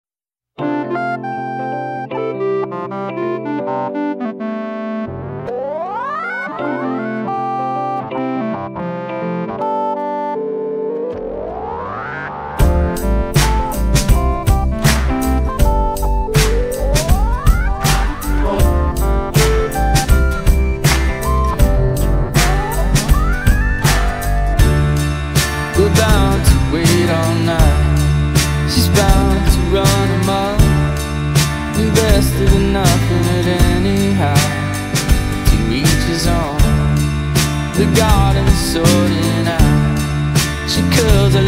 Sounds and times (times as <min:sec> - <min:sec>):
Electric piano: 0:00.6 - 0:41.4
Synthesizer: 0:00.6 - 0:41.4.